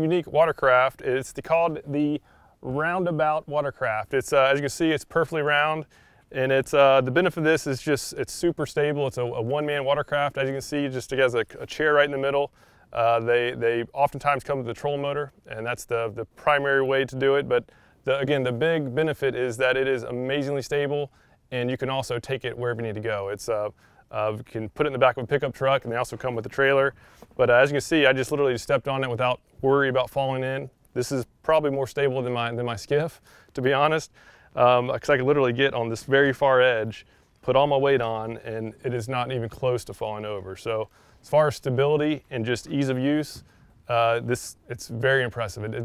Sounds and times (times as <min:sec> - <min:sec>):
Speech: 0:00.0 - 0:45.8.